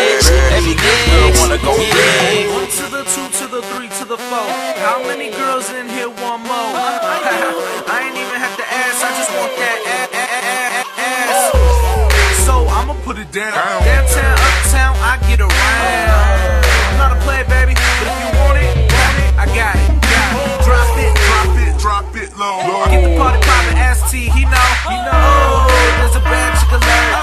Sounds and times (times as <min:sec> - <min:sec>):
Hip hop music: 0:00.0 - 0:27.2.